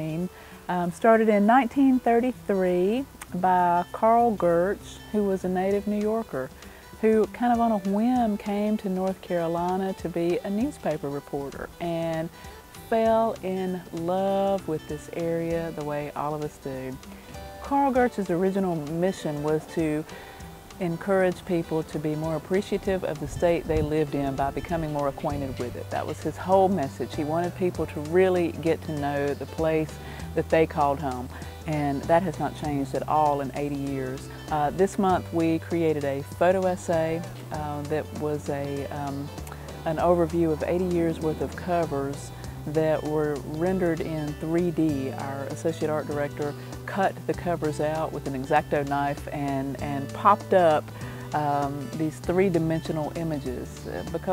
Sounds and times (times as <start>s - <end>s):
Speech: 0.0s - 17.0s, 17.6s - 20.1s, 20.8s - 54.3s
Music: 0.0s - 54.3s.